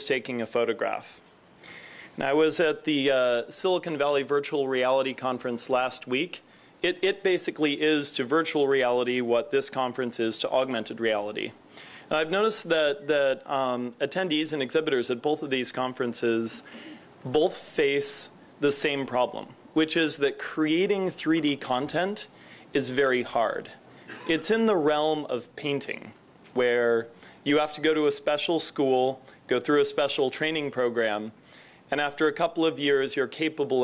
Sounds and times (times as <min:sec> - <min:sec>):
Speech: 0:00.0 - 0:01.2, 0:02.2 - 0:33.8.